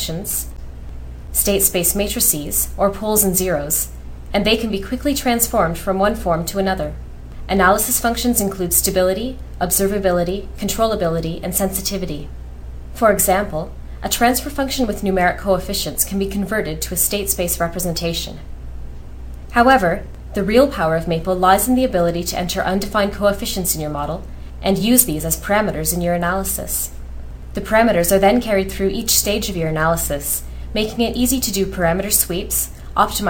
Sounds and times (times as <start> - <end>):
Speech: 0.0 - 0.6, 1.3 - 12.3, 13.0 - 18.5, 19.5 - 27.0, 27.6 - 33.3.